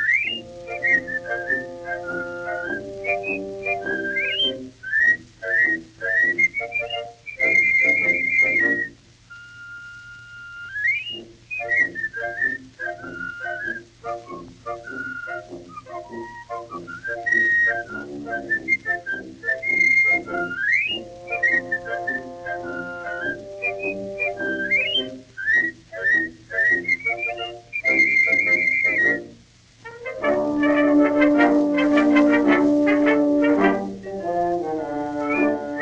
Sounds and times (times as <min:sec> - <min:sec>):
Music: 0:00.0 - 0:35.8.